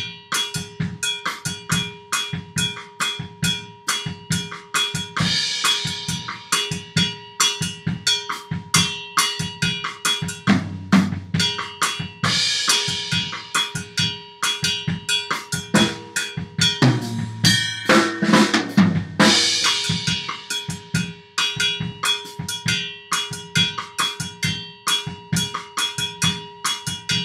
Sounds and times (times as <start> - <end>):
Drum kit: 0.0 - 27.2
Bass drum: 9.7 - 14.0, 15.6 - 21.0.